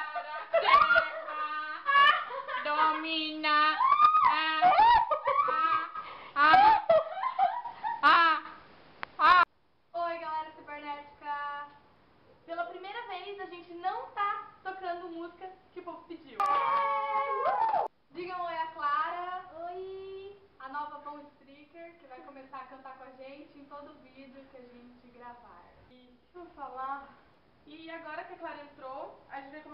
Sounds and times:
Giggle: 4.7s - 8.2s.

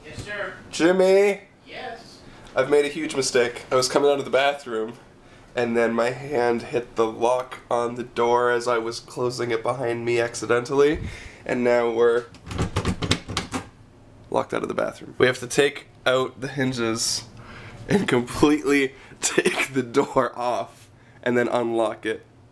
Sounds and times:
Speech: 0.0s - 5.0s, 5.6s - 12.3s, 14.3s - 17.3s, 17.9s - 22.2s.

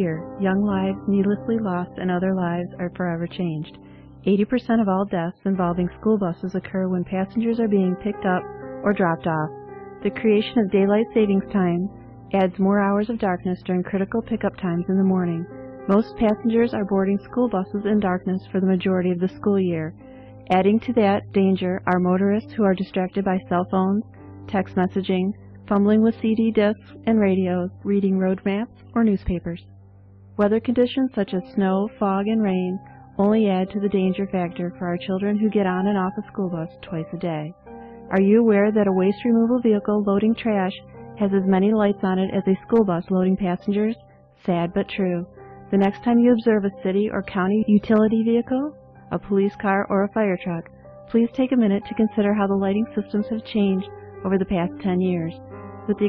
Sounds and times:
Speech: 0.0s - 29.7s, 30.4s - 56.0s
Music: 0.0s - 56.0s.

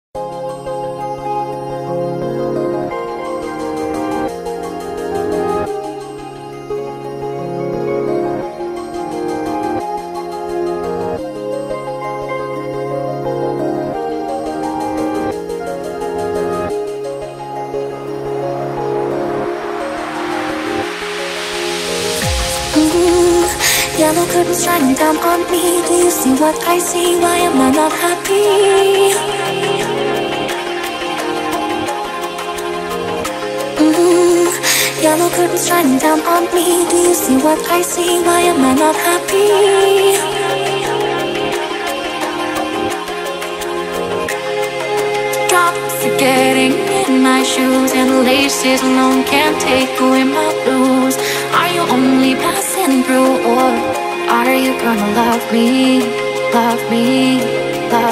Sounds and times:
New-age music: 0.2s - 58.1s.

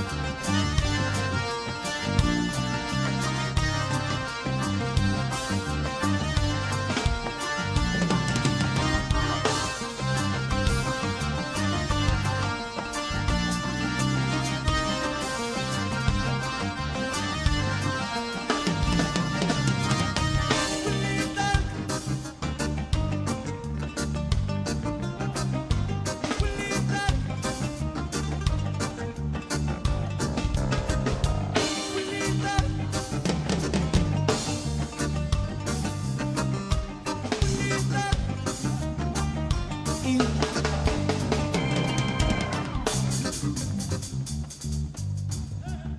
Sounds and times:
Music: 0.0s - 45.9s.

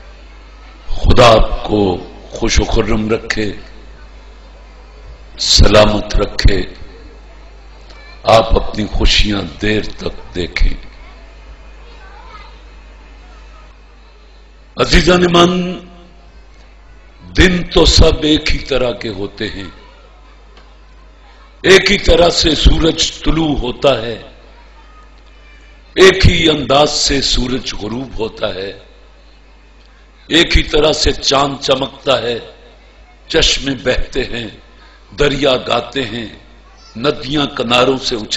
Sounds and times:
Male speech, man speaking: 0.9s - 3.8s, 5.4s - 7.0s, 8.2s - 11.0s, 14.8s - 16.1s, 17.3s - 19.8s, 21.6s - 24.4s, 26.0s - 28.9s, 30.3s - 32.6s, 33.3s - 38.3s.

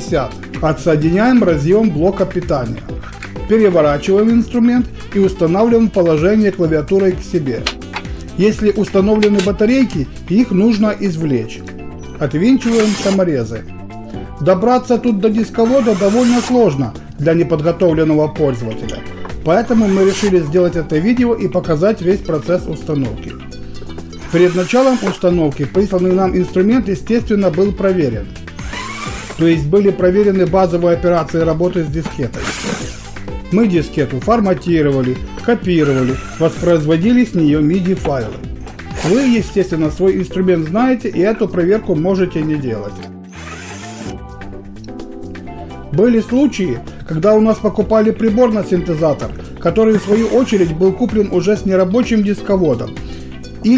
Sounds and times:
Speech: 0.0s - 2.8s, 3.4s - 7.6s, 8.4s - 11.6s, 12.2s - 13.7s, 14.4s - 23.4s, 24.3s - 28.3s, 29.4s - 32.5s, 33.5s - 38.4s, 39.0s - 43.0s, 45.9s - 52.9s
Music: 0.0s - 53.7s.

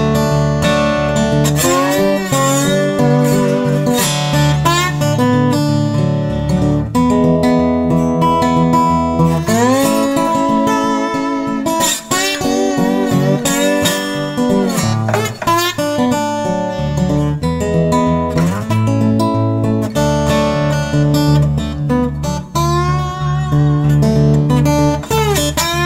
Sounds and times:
Acoustic guitar: 0.0s - 25.8s
Strum: 0.0s - 25.8s.

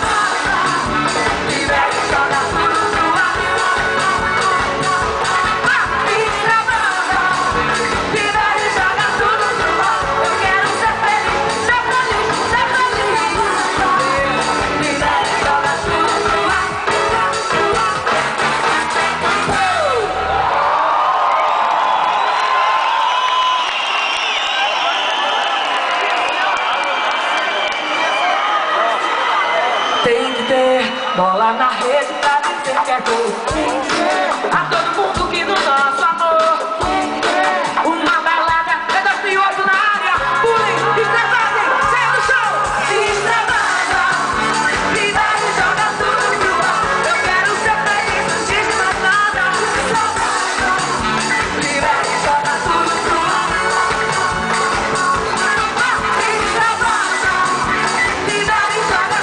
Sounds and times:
Pop music: 0.0s - 20.7s, 28.2s - 59.2s
Crowd: 0.0s - 59.2s.

